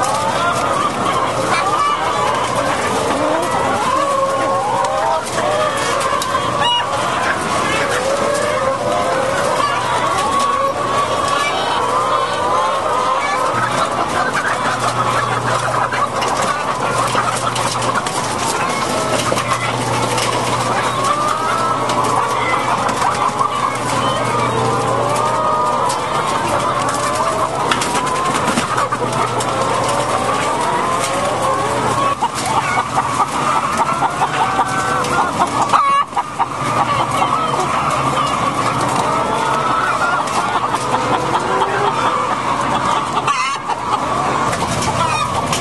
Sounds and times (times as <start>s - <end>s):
Chicken, rooster: 0.0s - 45.6s.